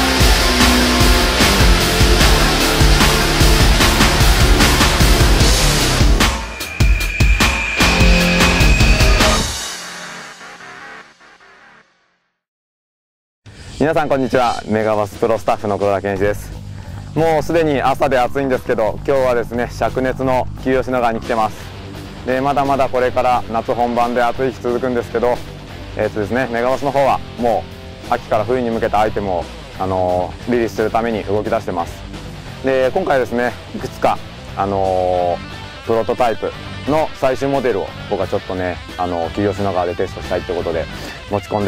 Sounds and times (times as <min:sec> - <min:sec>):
Music: 0:00.0 - 0:12.4, 0:13.5 - 0:41.6
Speech: 0:13.8 - 0:16.6, 0:17.2 - 0:21.7, 0:22.3 - 0:32.0, 0:32.6 - 0:41.6.